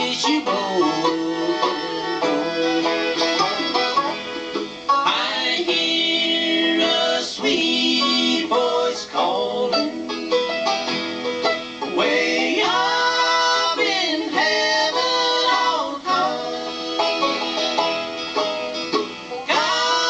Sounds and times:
Banjo: 0:00.0 - 0:20.1
Bluegrass: 0:00.0 - 0:20.1
Guitar: 0:00.0 - 0:20.1
Violin, fiddle: 0:00.0 - 0:20.1.

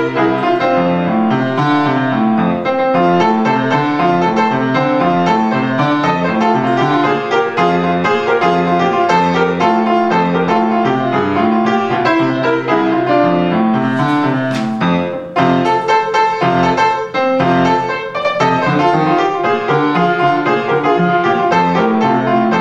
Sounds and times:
Music: 0:00.0 - 0:22.6.

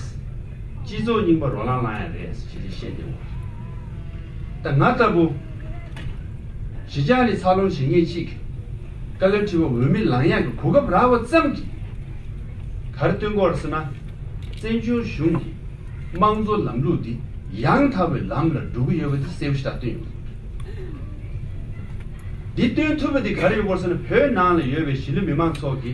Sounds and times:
Male speech, man speaking: 0:00.8 - 0:03.2, 0:04.6 - 0:05.4, 0:06.9 - 0:08.4, 0:09.2 - 0:11.7, 0:13.0 - 0:14.0, 0:14.6 - 0:15.6, 0:16.2 - 0:20.1, 0:22.6 - 0:25.9
Narration, monologue: 0:00.8 - 0:03.4, 0:04.6 - 0:05.5, 0:06.7 - 0:12.0, 0:12.9 - 0:20.5, 0:22.5 - 0:25.9.

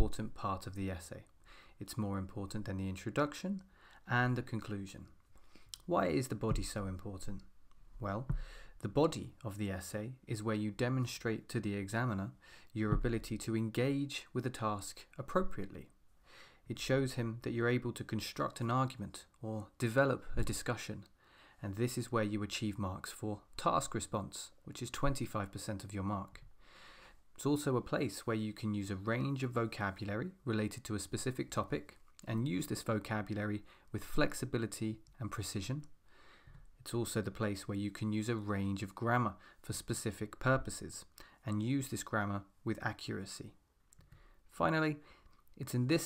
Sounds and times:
Speech: 0:00.0 - 0:05.2, 0:05.8 - 0:16.0, 0:16.7 - 0:26.5, 0:27.4 - 0:35.9, 0:36.8 - 0:43.6, 0:44.5 - 0:45.0, 0:45.6 - 0:46.0.

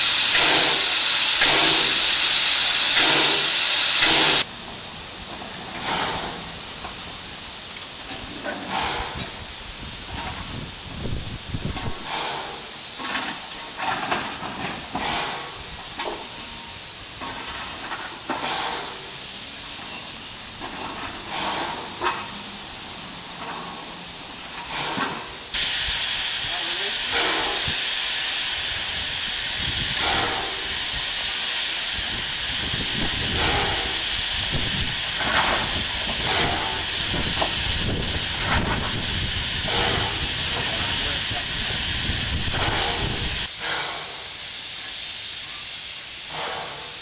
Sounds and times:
Hiss: 0:00.0 - 0:47.0.

